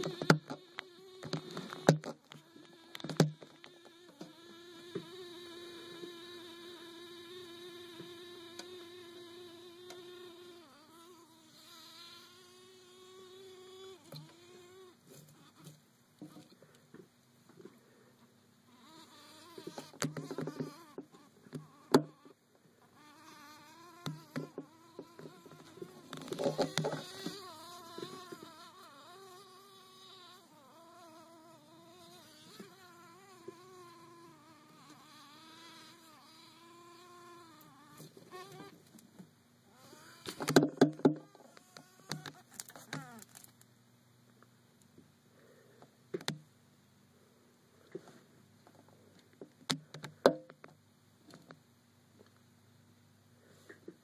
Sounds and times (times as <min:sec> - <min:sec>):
Fly, housefly: 0:00.0 - 0:16.6, 0:18.7 - 0:39.0, 0:39.7 - 0:43.6.